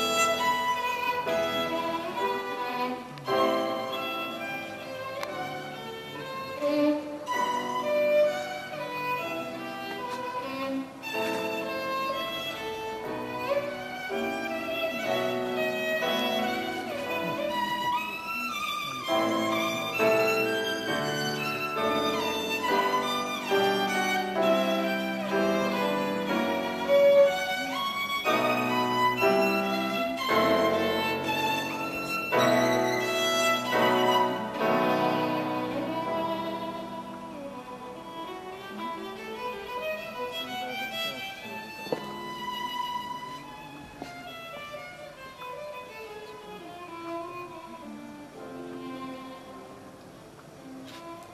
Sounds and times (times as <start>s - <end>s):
Violin, fiddle: 0.0s - 51.3s.